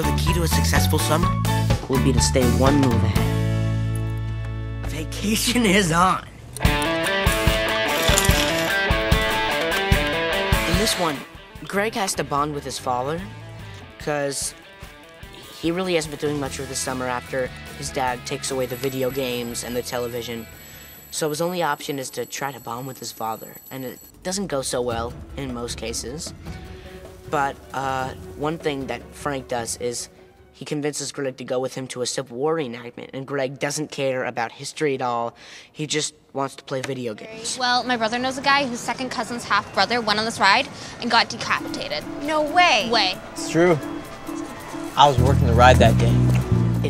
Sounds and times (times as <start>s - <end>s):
Speech: 0.0s - 3.2s, 4.9s - 6.3s, 14.0s - 14.5s, 15.6s - 20.5s, 27.3s - 38.0s, 45.0s - 46.2s
Music: 0.0s - 21.1s, 24.1s - 32.9s, 37.6s - 46.8s.